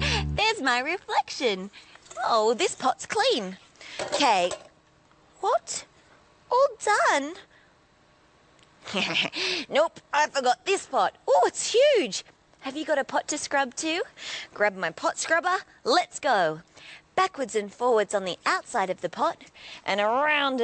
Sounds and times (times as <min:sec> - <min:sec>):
Speech: 0:00.0 - 0:03.6, 0:04.2 - 0:04.6, 0:05.4 - 0:05.9, 0:06.5 - 0:07.5, 0:09.7 - 0:16.6, 0:17.2 - 0:20.6.